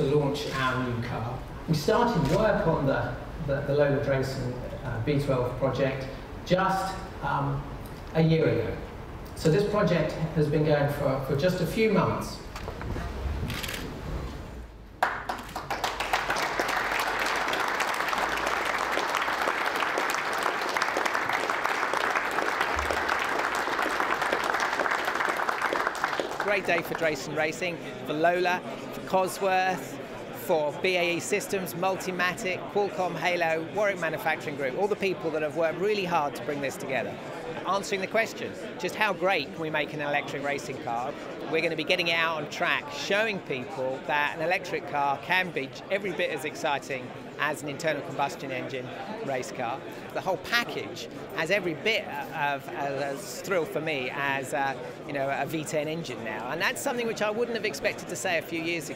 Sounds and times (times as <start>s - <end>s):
Speech: 0.0s - 8.8s, 9.4s - 12.4s, 26.4s - 58.9s.